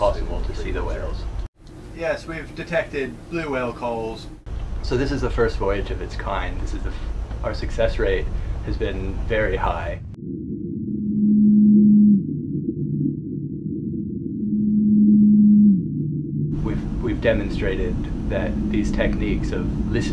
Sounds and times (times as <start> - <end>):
Speech: 0.0 - 1.3, 2.0 - 10.0, 16.6 - 20.1
Outside, rural or natural: 0.0 - 20.1.